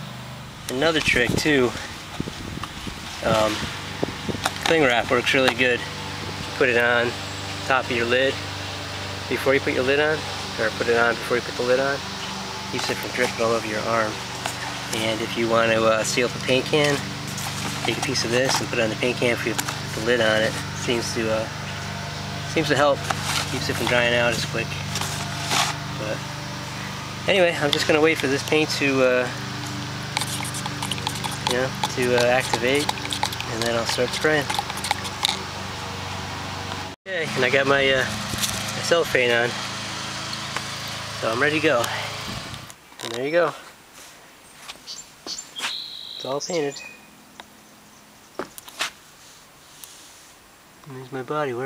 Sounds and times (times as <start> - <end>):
Outside, rural or natural: 0.0 - 51.6
Speech: 0.7 - 1.8, 3.2 - 3.6, 4.7 - 5.9, 6.6 - 8.4, 9.3 - 12.0, 12.8 - 14.2, 14.9 - 17.0, 17.9 - 21.5, 22.5 - 24.8, 26.0 - 26.2, 27.3 - 29.4, 31.5 - 32.9, 33.5 - 34.5, 37.1 - 38.1, 38.8 - 39.6, 41.2 - 42.0, 43.1 - 43.7, 46.2 - 46.9, 50.8 - 51.6.